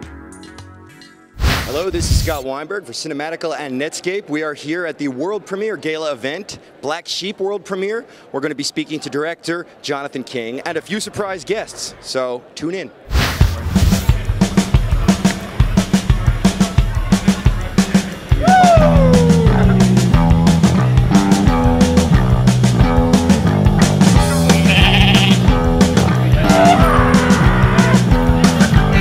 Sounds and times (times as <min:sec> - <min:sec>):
Music: 0:00.0 - 0:02.4, 0:13.2 - 0:29.0
Sheep: 0:24.5 - 0:25.4.